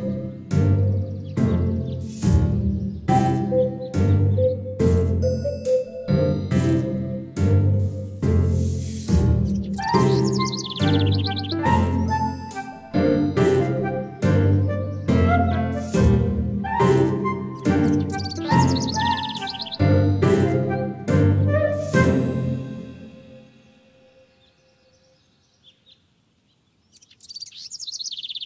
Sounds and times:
Background music: 0.0s - 24.5s.

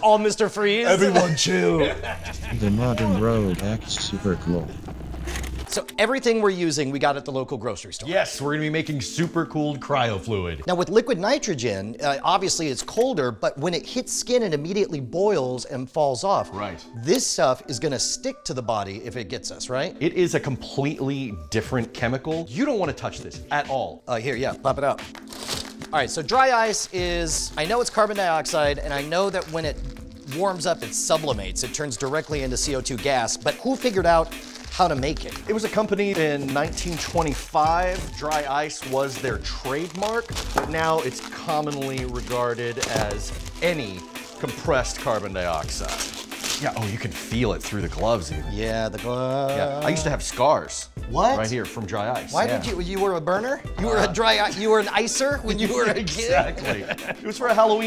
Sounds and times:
Music: 0.0s - 57.8s.

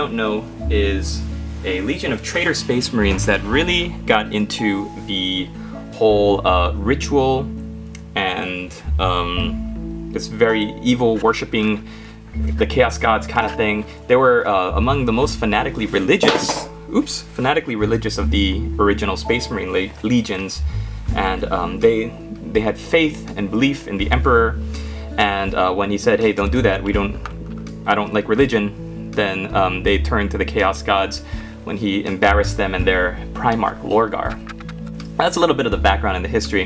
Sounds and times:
Speech: 0.0s - 7.5s, 8.1s - 27.2s, 27.8s - 34.4s, 35.2s - 36.6s
Music: 0.0s - 36.6s.

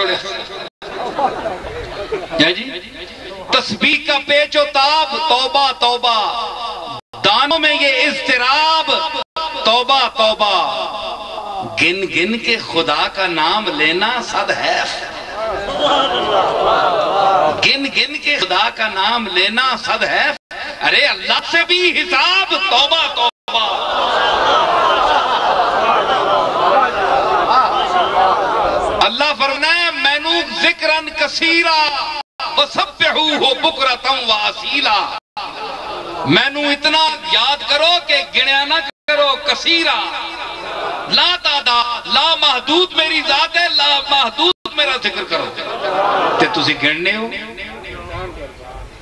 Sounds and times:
Male speech, man speaking: 0.0s - 0.6s, 1.2s - 23.8s, 26.7s - 28.1s, 29.0s - 35.2s, 36.2s - 40.4s, 41.1s - 48.9s
Narration, monologue: 0.0s - 0.7s, 1.9s - 16.2s, 17.6s - 23.3s, 29.0s - 35.2s, 36.3s - 49.0s.

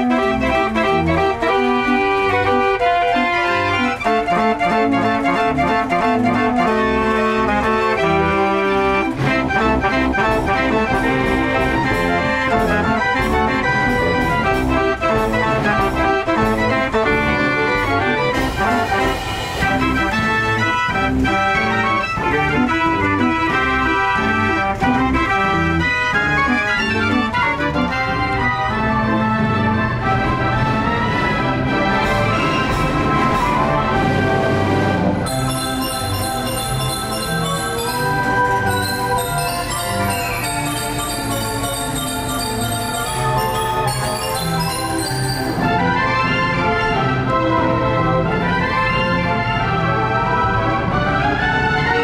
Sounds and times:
Music: 0.0s - 52.0s.

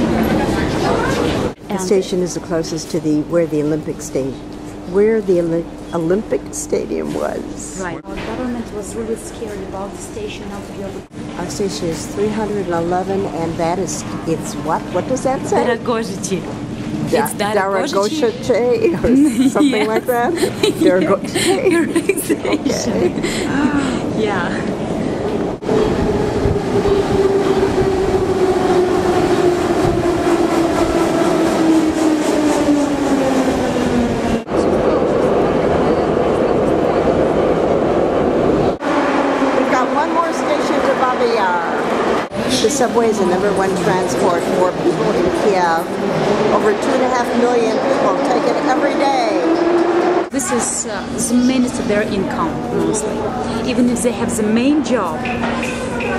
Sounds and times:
Train: 0.0s - 1.6s, 24.0s - 53.4s
Subway, metro, underground: 0.0s - 15.5s, 16.1s - 56.1s.

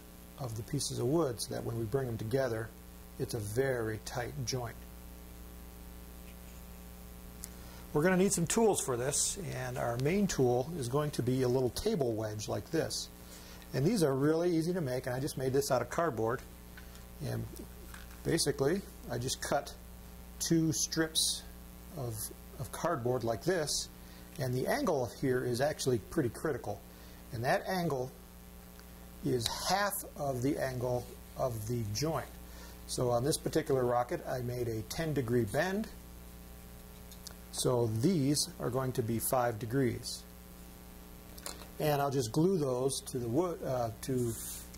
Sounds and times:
Speech: 0.4s - 4.8s, 7.9s - 13.1s, 13.7s - 16.5s, 17.2s - 19.8s, 20.4s - 28.2s, 29.2s - 36.0s, 37.5s - 40.3s, 41.8s - 44.5s.

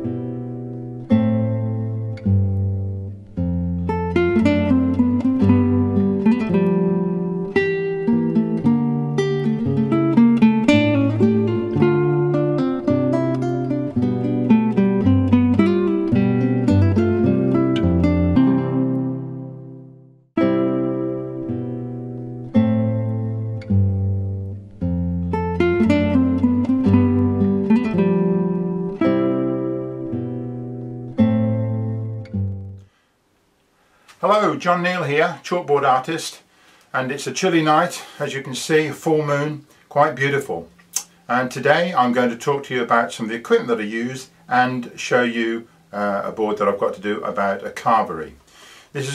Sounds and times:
Music: 0.0s - 32.9s.

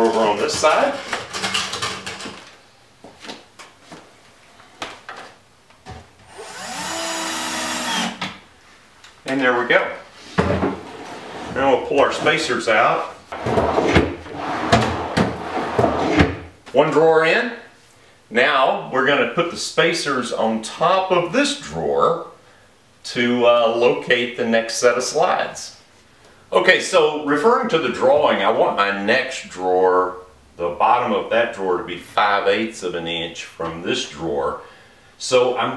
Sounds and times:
Speech: 0.0s - 1.1s, 9.2s - 10.1s, 11.5s - 13.2s, 16.7s - 22.4s, 23.0s - 25.8s, 26.5s - 35.7s.

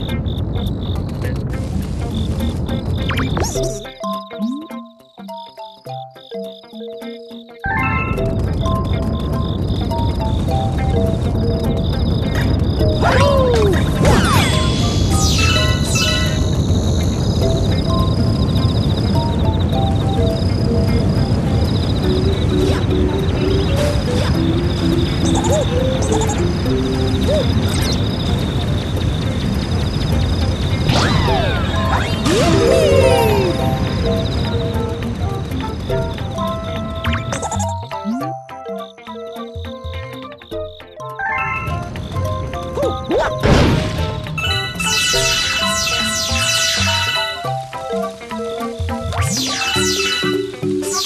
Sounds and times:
Music: 0.0s - 51.0s.

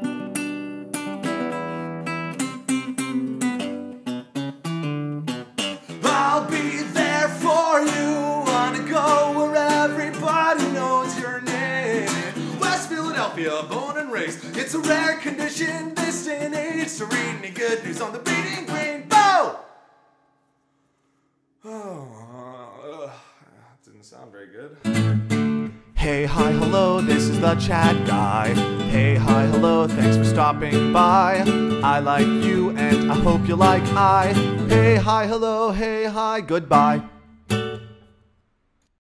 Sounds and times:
Acoustic guitar: 0.0s - 21.9s, 24.8s - 38.9s
Singing: 6.0s - 19.6s, 26.0s - 37.0s.

